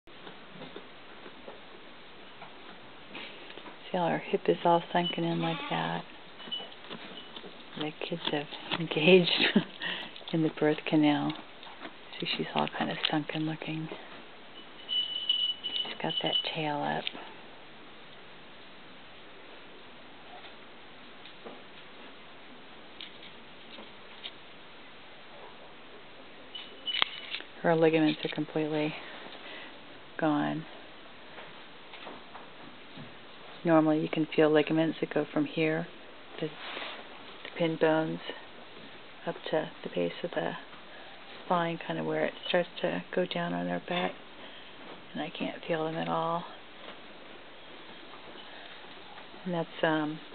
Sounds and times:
Speech: 0:03.8 - 0:06.1, 0:07.8 - 0:09.7, 0:10.3 - 0:11.4, 0:12.2 - 0:14.0, 0:16.0 - 0:17.2, 0:27.6 - 0:29.0, 0:30.2 - 0:30.8, 0:33.6 - 0:36.6, 0:37.5 - 0:38.4, 0:39.2 - 0:40.7, 0:41.5 - 0:44.2, 0:45.1 - 0:46.6, 0:49.4 - 0:50.3.

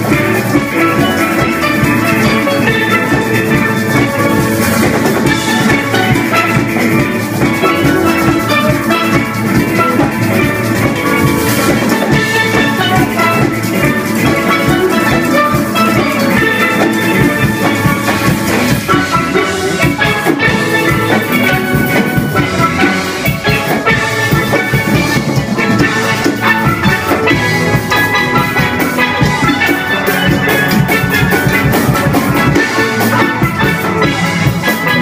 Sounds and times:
Drum: 0:00.0 - 0:35.0
Steelpan: 0:00.0 - 0:35.0.

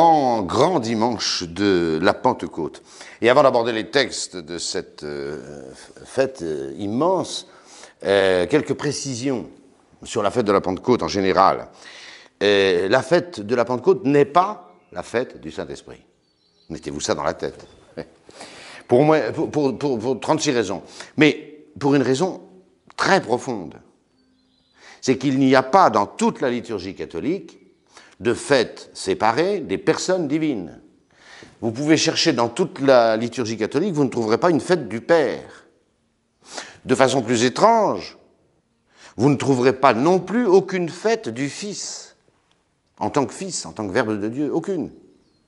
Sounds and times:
Speech: 0:00.0 - 0:11.8, 0:12.4 - 0:16.1, 0:16.7 - 0:18.2, 0:18.8 - 0:23.9, 0:25.0 - 0:27.6, 0:28.2 - 0:30.9, 0:31.6 - 0:35.7, 0:36.8 - 0:38.2, 0:39.2 - 0:42.2, 0:43.0 - 0:45.0.

